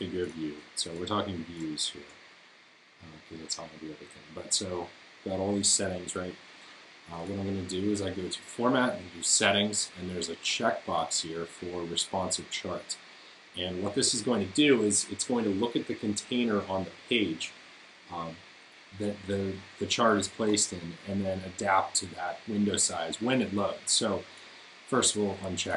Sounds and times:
Speech: 0:00.0 - 0:02.1, 0:03.0 - 0:06.4, 0:07.1 - 0:18.4, 0:19.0 - 0:24.3, 0:24.9 - 0:25.7.

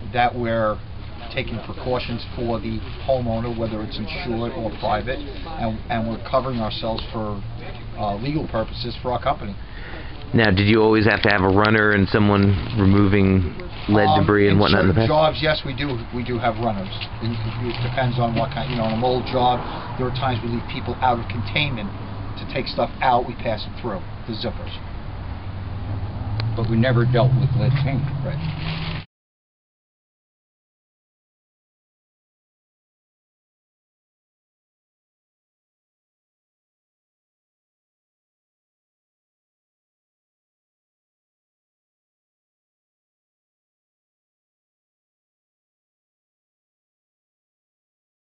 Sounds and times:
Speech: 0:00.0 - 0:09.6, 0:10.3 - 0:24.8, 0:26.6 - 0:28.4.

